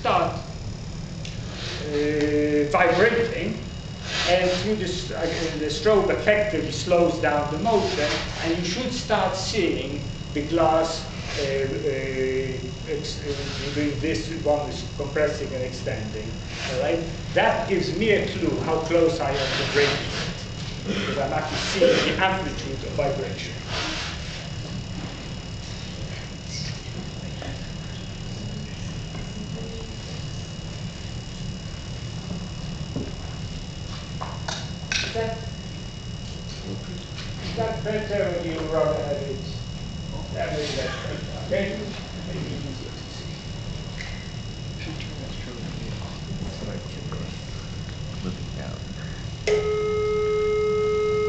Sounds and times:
Speech: 0.0 - 0.4, 1.8 - 3.7, 4.3 - 20.3, 21.2 - 23.6, 36.6 - 43.4, 44.8 - 47.5, 48.2 - 49.0.

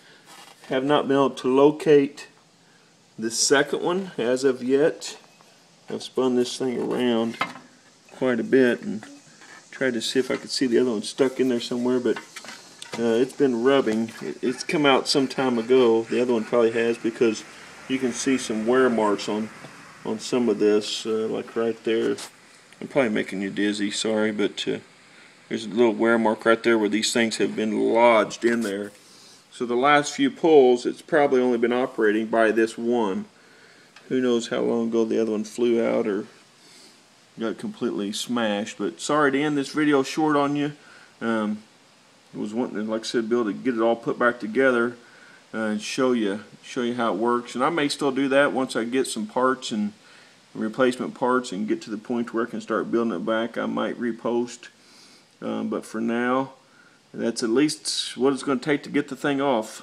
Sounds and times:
Speech: 0.7 - 2.4, 3.2 - 5.3, 5.9 - 7.5, 8.1 - 12.3, 12.9 - 24.9, 25.5 - 33.3, 34.1 - 36.4, 37.4 - 41.7, 42.3 - 50.0, 50.6 - 54.8, 55.4 - 59.8.

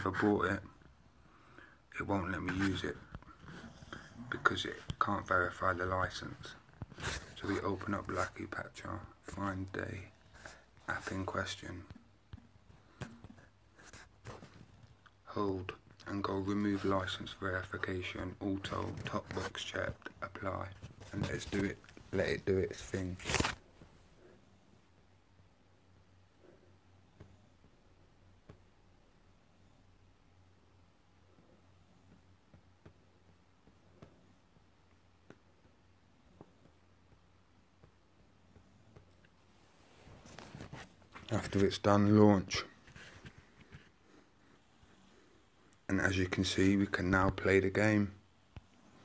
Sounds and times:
Speech: 0.0 - 0.8, 1.9 - 3.1, 4.2 - 6.6, 7.2 - 10.1, 10.8 - 12.0, 15.2 - 23.4, 41.2 - 42.8, 45.9 - 48.2
Inside, small room: 0.0 - 49.0.

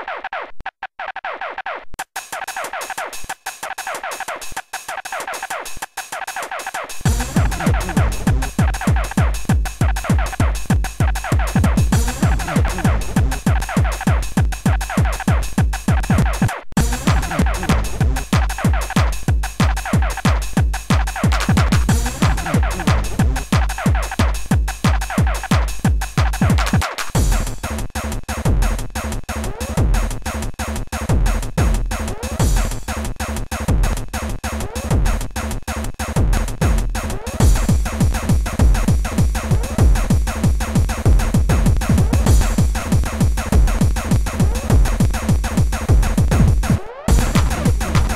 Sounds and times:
Music: 0.0 - 48.1.

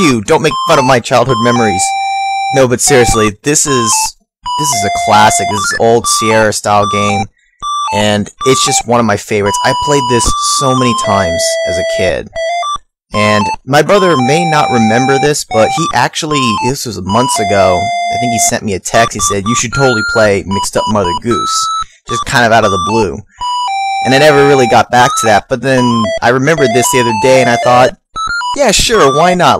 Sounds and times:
Speech: 0.0 - 1.9, 2.6 - 7.3, 7.9 - 12.3, 13.2 - 23.2, 24.0 - 28.0, 28.6 - 29.5.

